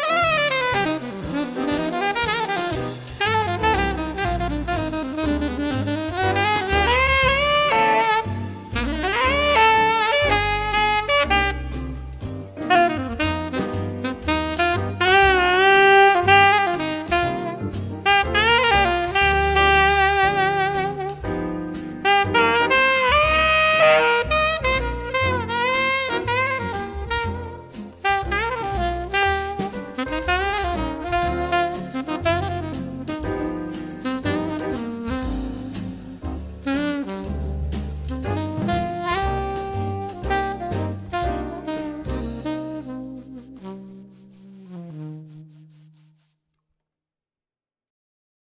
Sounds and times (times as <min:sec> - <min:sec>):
Jazz: 0:00.0 - 0:46.4
Saxophone: 0:00.0 - 0:46.4.